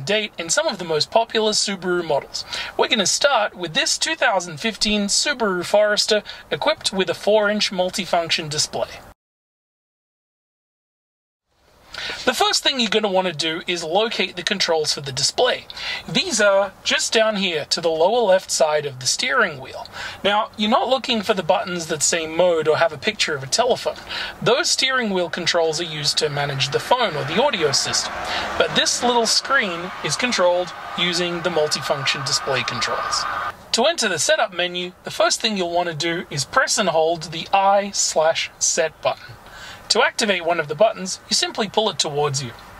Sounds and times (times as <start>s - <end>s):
Speech: 0.0s - 9.1s, 12.2s - 42.6s.